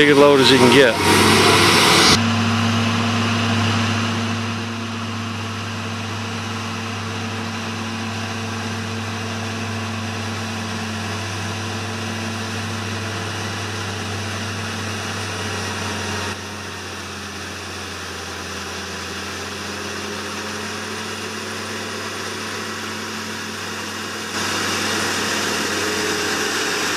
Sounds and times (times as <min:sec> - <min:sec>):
Vehicle: 0:00.0 - 0:26.9.